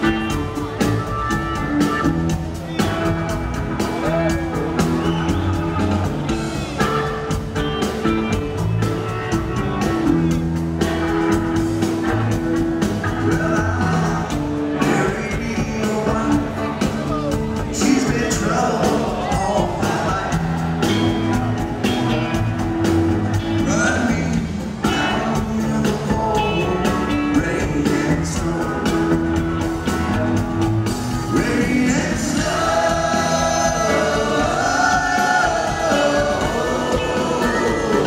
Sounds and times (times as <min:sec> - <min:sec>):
Music: 0:00.0 - 0:38.0.